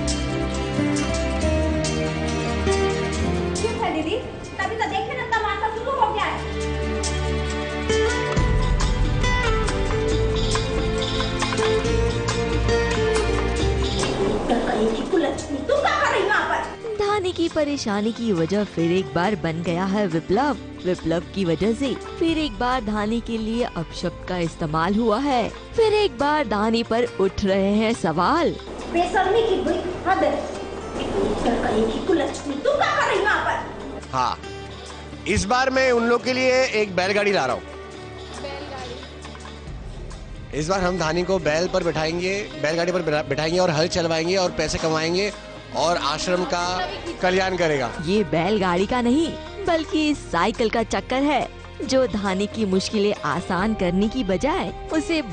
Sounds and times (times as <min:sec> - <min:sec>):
Music: 0:00.0 - 0:55.3.